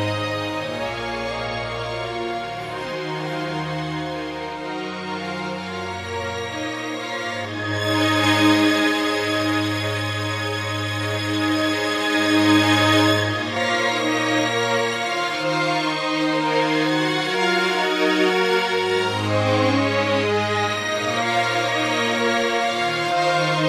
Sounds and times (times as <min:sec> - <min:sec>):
Violin, fiddle: 0:00.0 - 0:23.6.